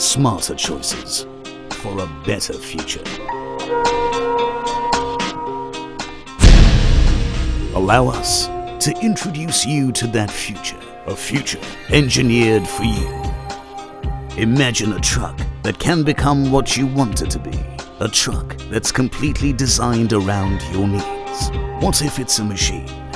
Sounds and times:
Speech: 0:00.0 - 0:01.2, 0:01.8 - 0:03.2, 0:07.8 - 0:13.2, 0:14.4 - 0:22.9
Music: 0:00.0 - 0:23.1.

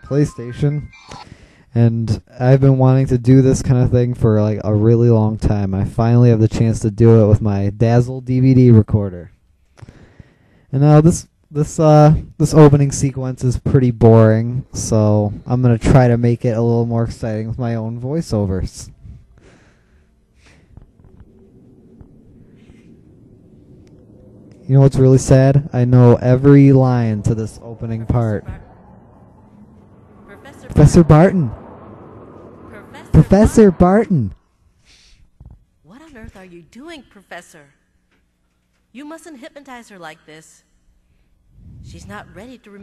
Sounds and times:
Speech: 0:00.0 - 0:01.0, 0:01.8 - 0:09.3, 0:10.7 - 0:19.0, 0:24.7 - 0:28.7, 0:30.3 - 0:31.6, 0:32.7 - 0:34.4, 0:35.9 - 0:37.8, 0:41.8 - 0:42.8.

